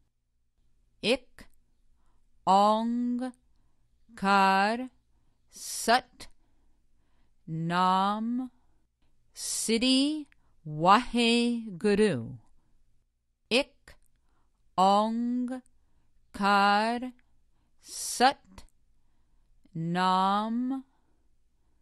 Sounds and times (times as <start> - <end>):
Speech: 1.0 - 1.6, 2.5 - 3.4, 4.1 - 6.3, 7.5 - 8.6, 9.4 - 12.5, 13.5 - 14.0, 14.8 - 15.7, 16.3 - 17.2, 17.8 - 18.7, 19.7 - 20.9.